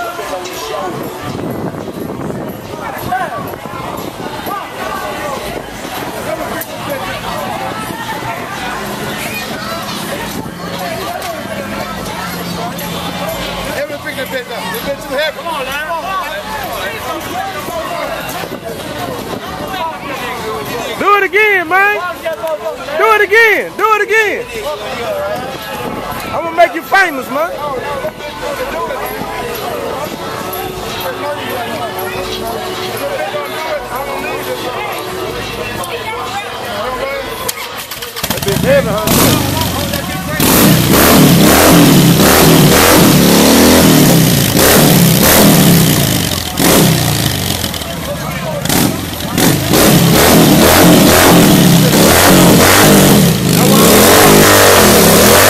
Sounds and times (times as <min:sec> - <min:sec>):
Speech: 0:00.0 - 0:41.6, 0:47.5 - 0:49.8
Motorcycle: 0:37.4 - 0:55.5.